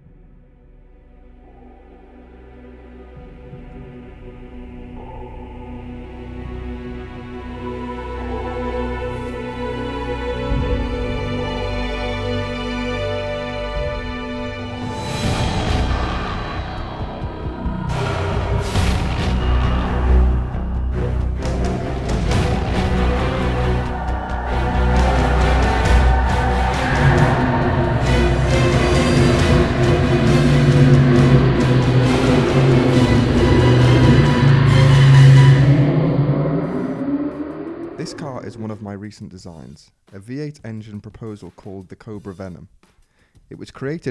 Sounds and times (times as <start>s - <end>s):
Music: 0.0s - 44.1s.